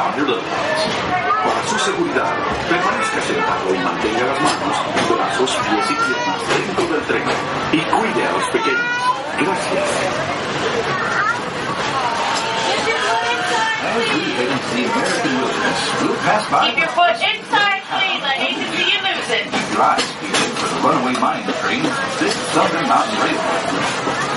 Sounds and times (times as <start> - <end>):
Speech: 12.7 - 23.6.